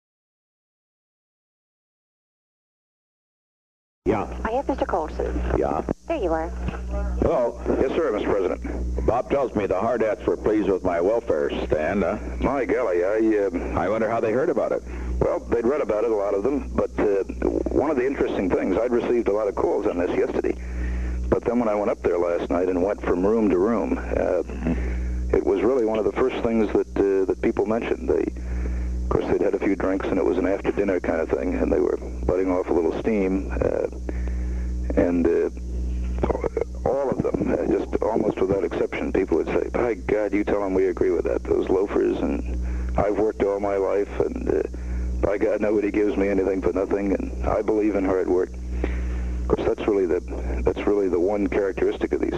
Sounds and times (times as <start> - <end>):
Speech: 4.1 - 20.6, 21.3 - 28.4, 29.1 - 34.0, 34.9 - 35.6, 36.2 - 48.5, 49.5 - 52.3.